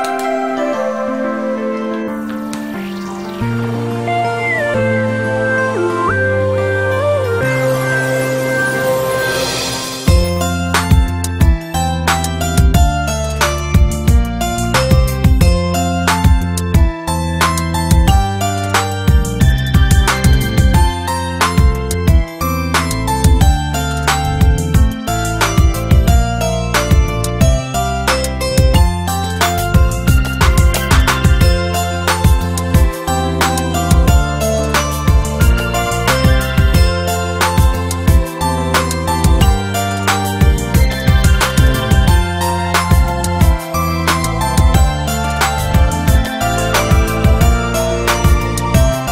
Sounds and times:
Music: 0.0s - 49.1s.

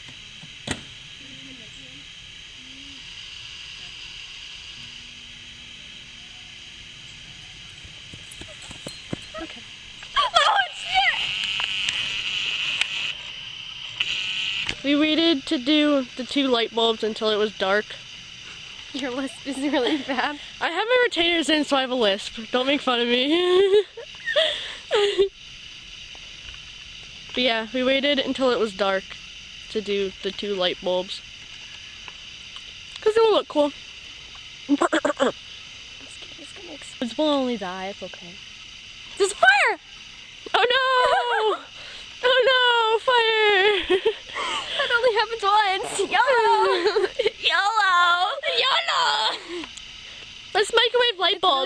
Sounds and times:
Microwave oven: 0.0s - 51.6s.

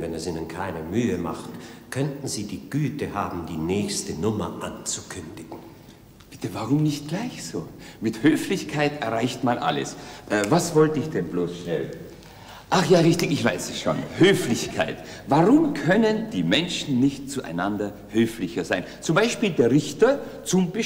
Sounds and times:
Speech: 0.0s - 5.7s, 6.3s - 12.1s, 12.7s - 20.8s.

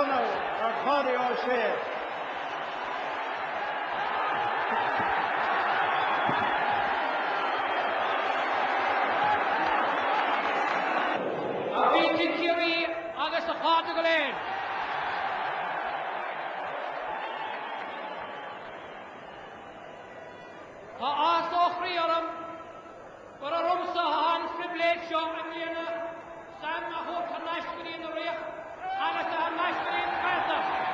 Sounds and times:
Male speech, man speaking: 0.0s - 1.9s, 11.8s - 14.4s, 21.0s - 22.6s, 23.4s - 30.7s
Narration, monologue: 0.0s - 1.9s, 11.7s - 14.4s, 21.0s - 30.6s.

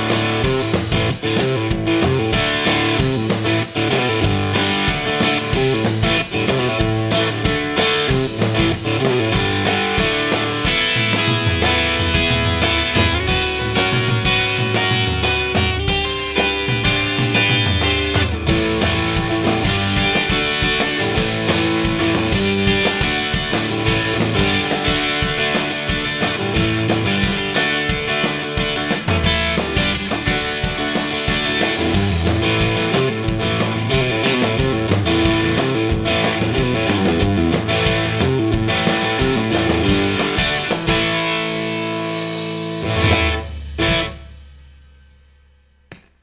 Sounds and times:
Rock music: 0.0s - 45.1s.

